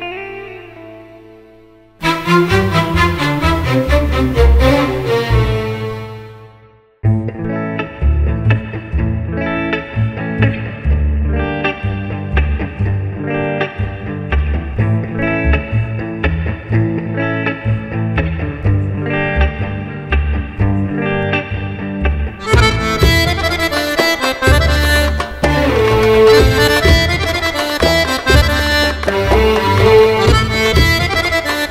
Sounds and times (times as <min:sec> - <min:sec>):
Classical music: 0:02.0 - 0:06.7, 0:22.4 - 0:31.7.